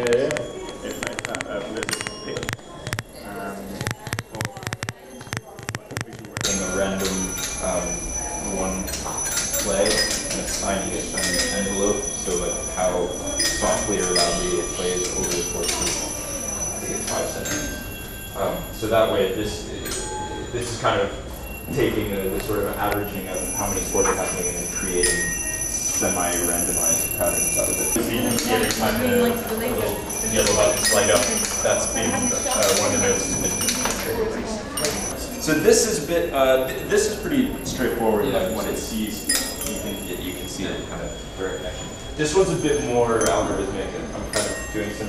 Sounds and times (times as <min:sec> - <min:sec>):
Speech: 0:00.0 - 0:17.8, 0:18.4 - 0:25.4, 0:26.0 - 0:45.0.